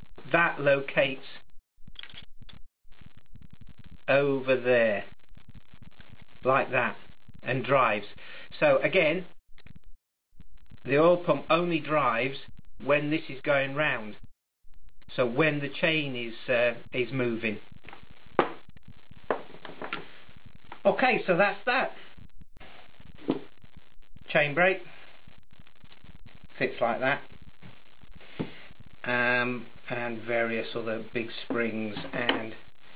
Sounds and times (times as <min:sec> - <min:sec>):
Inside, small room: 0:00.0 - 0:32.9
Speech: 0:00.3 - 0:01.4, 0:04.1 - 0:05.1, 0:06.4 - 0:09.3, 0:10.8 - 0:14.2, 0:15.1 - 0:17.6, 0:20.8 - 0:22.0, 0:24.3 - 0:24.9, 0:26.6 - 0:27.3, 0:29.1 - 0:32.6.